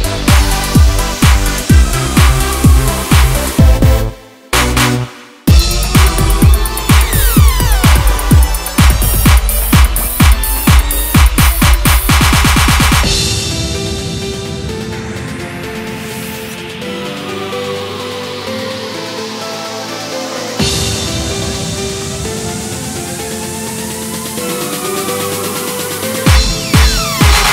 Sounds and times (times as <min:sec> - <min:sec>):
Electronica: 0:00.0 - 0:27.5.